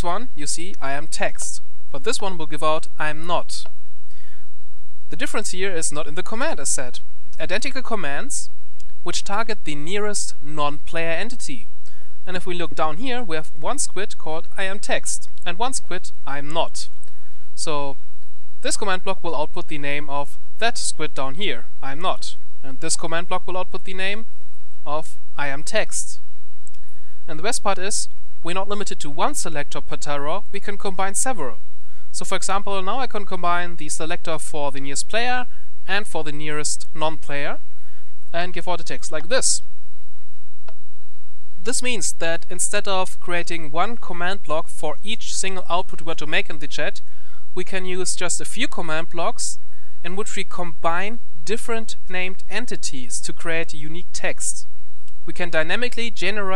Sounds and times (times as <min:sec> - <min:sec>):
Narration, monologue: 0:00.0 - 0:56.5.